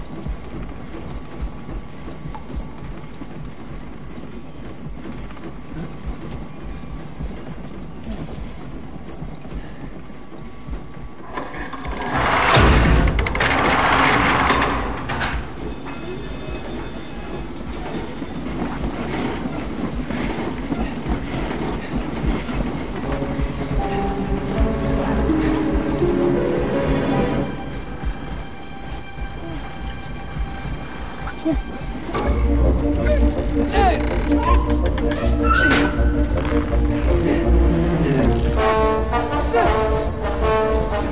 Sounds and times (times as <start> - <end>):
Music: 22.4 - 41.1.